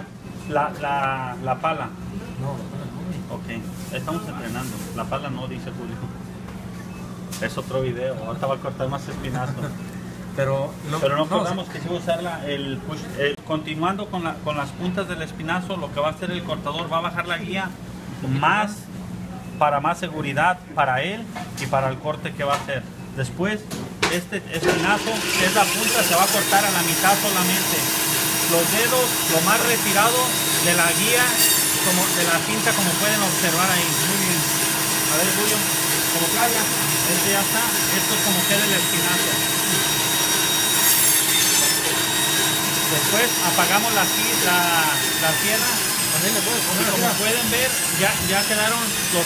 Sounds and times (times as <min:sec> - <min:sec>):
Speech: 0:00.5 - 0:06.2, 0:19.6 - 0:27.9, 0:28.5 - 0:34.5, 0:35.1 - 0:39.5, 0:42.9 - 0:49.2.